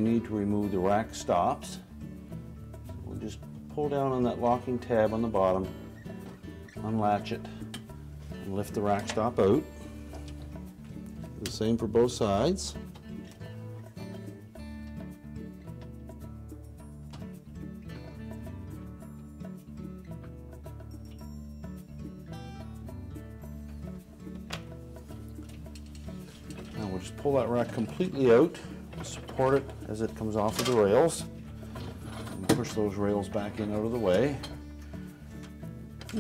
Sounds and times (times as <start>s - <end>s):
Speech: 0.0s - 1.8s, 3.0s - 5.7s, 6.8s - 7.5s, 8.5s - 9.6s, 11.4s - 12.8s, 26.8s - 31.3s, 32.4s - 34.5s
Music: 0.0s - 36.2s.